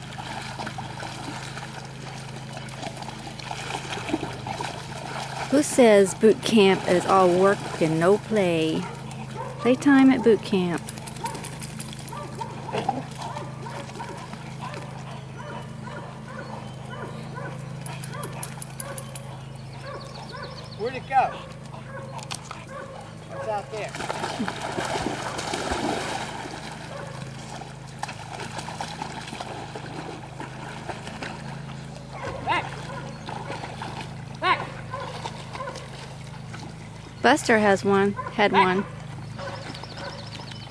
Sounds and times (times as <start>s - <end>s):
Outside, rural or natural: 0.0s - 40.7s
Dog: 8.8s - 23.8s, 26.9s - 27.3s, 32.2s - 36.0s, 38.1s - 40.4s.